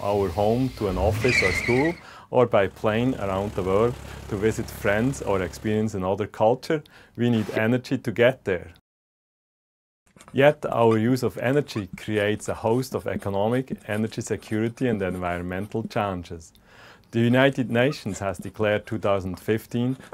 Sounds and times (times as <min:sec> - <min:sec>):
Speech: 0:00.0 - 0:08.8, 0:10.3 - 0:16.5, 0:17.1 - 0:20.1.